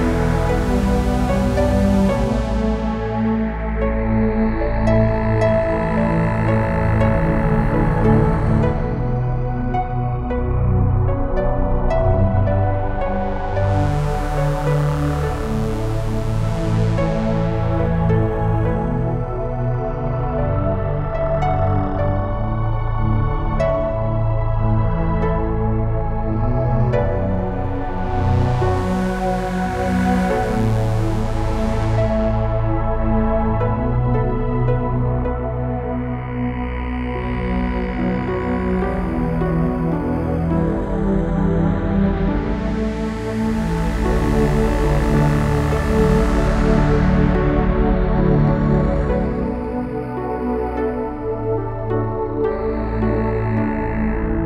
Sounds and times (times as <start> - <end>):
Soundtrack music: 0.0 - 54.4
Tender music: 0.0 - 54.4.